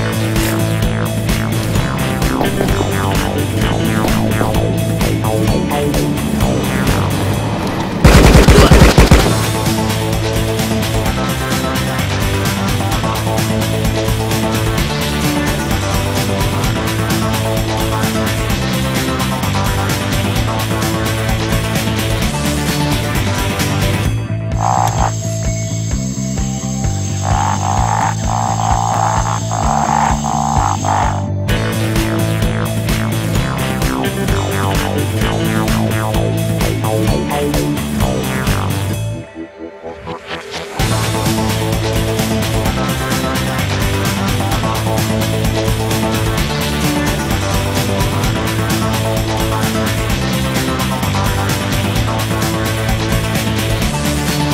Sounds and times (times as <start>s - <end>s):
Music: 0.0s - 54.5s.